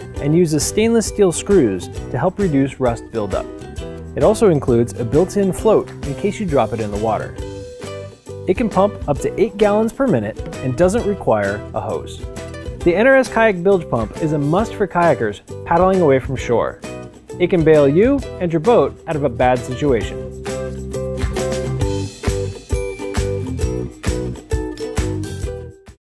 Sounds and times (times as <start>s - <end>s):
Music: 0.0s - 26.0s
Speech: 0.2s - 3.5s, 4.2s - 7.4s, 8.5s - 12.2s, 12.8s - 16.8s, 17.4s - 20.2s.